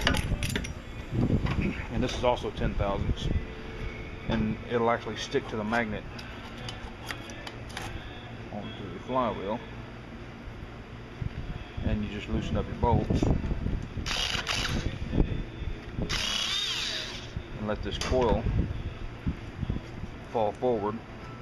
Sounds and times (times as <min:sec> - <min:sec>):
Power tool: 0:14.1 - 0:14.9, 0:16.1 - 0:17.4.